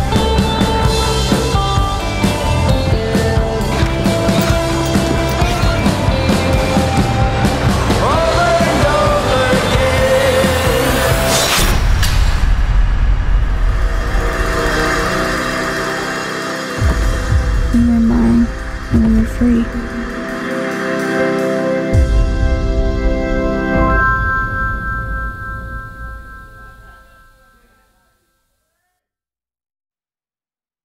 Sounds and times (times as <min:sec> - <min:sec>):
Music: 0:00.0 - 0:28.3
Speech: 0:17.8 - 0:19.8, 0:26.6 - 0:29.0.